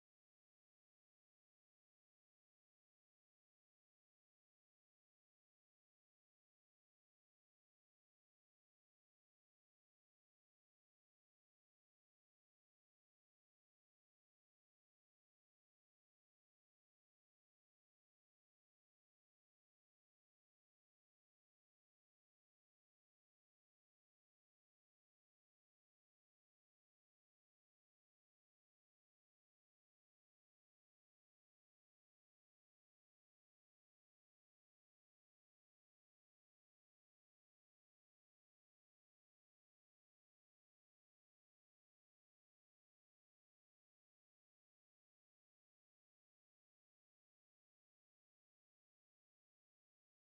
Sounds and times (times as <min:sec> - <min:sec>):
Silence: 0:00.0 - 0:50.2.